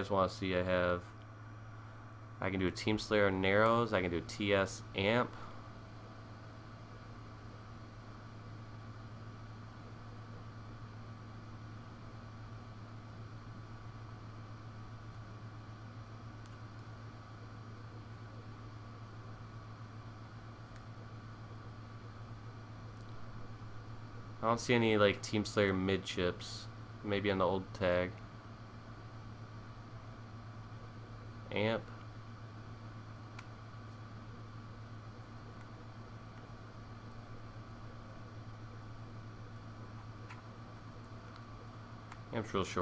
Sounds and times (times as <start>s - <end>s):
Speech: 0.0s - 1.1s, 2.4s - 5.4s, 24.4s - 28.2s, 31.5s - 32.0s, 42.3s - 42.8s.